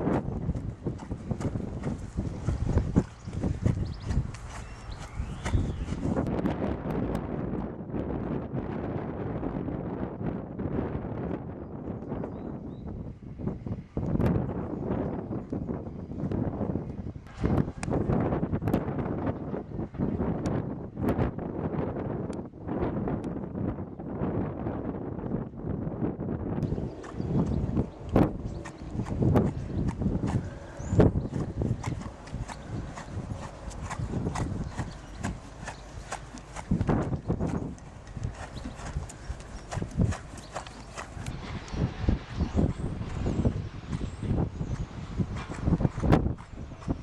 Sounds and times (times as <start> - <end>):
Clip-clop: 0.0 - 8.5, 26.6 - 47.0.